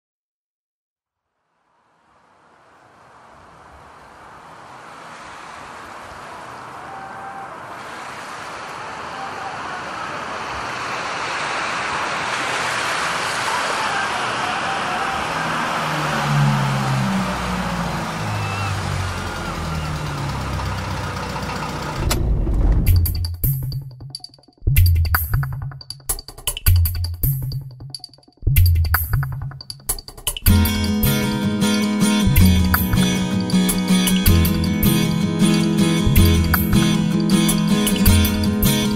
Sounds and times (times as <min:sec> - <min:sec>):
Silence: 0:01.1 - 0:13.5.